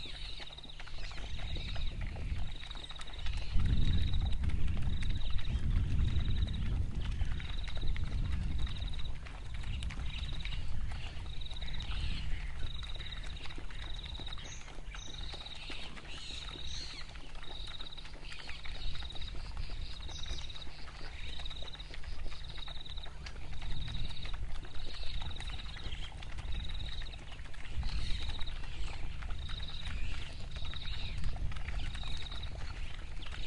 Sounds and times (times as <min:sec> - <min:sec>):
Animal: 0:00.0 - 0:33.4.